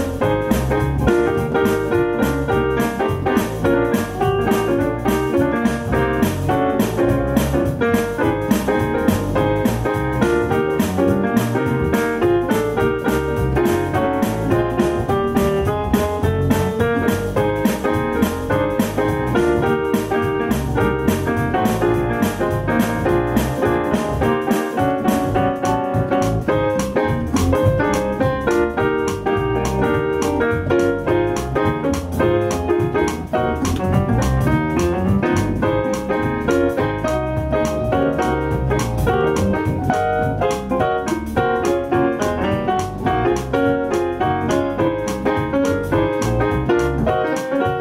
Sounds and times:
Piano: 0:00.0 - 0:47.8.

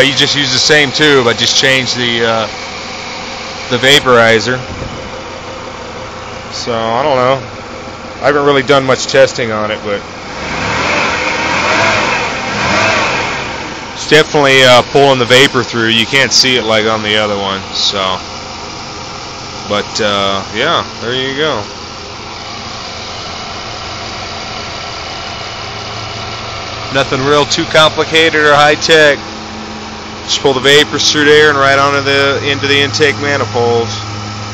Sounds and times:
Speech: 0:00.0 - 0:02.5, 0:03.7 - 0:04.7, 0:06.5 - 0:07.5, 0:08.2 - 0:10.1, 0:14.0 - 0:18.2, 0:19.6 - 0:21.7, 0:26.9 - 0:29.2, 0:30.3 - 0:34.1
Engine: 0:00.0 - 0:34.5.

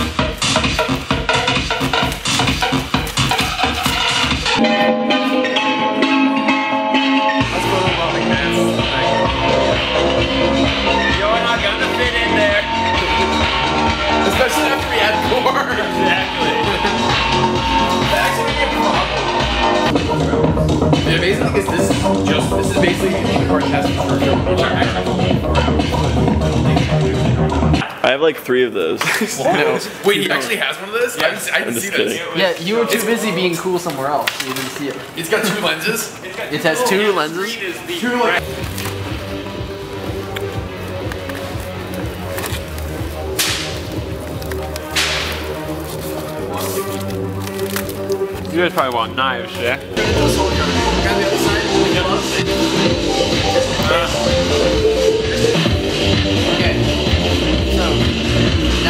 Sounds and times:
Music: 0:00.0 - 0:28.2, 0:36.7 - 0:58.8.

